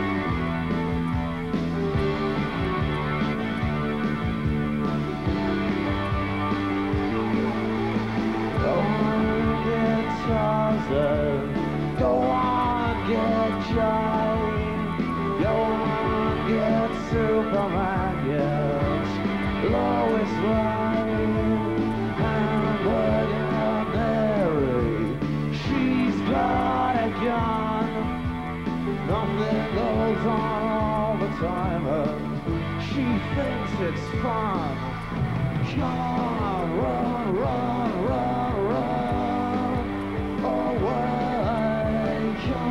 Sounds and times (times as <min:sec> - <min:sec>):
Music: 0:00.0 - 0:42.7.